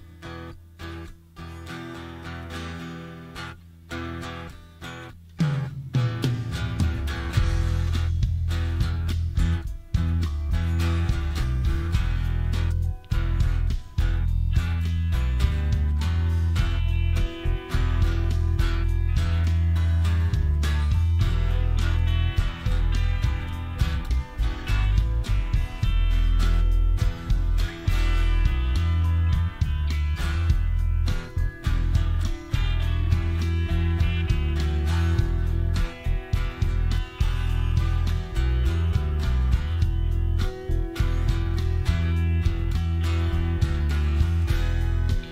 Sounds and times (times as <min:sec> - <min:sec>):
Music: 0:00.0 - 0:45.3.